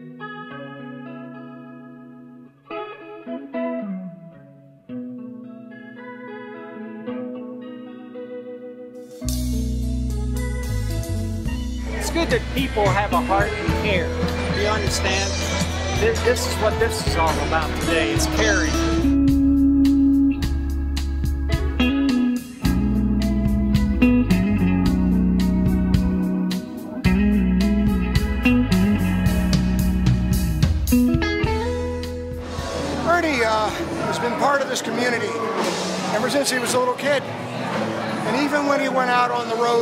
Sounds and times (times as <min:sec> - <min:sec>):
Rock music: 0:00.0 - 0:38.3
Electric guitar: 0:00.0 - 0:38.4
Blues: 0:00.0 - 0:38.8
Speech: 0:11.9 - 0:19.0, 0:33.0 - 0:37.3, 0:38.2 - 0:39.8.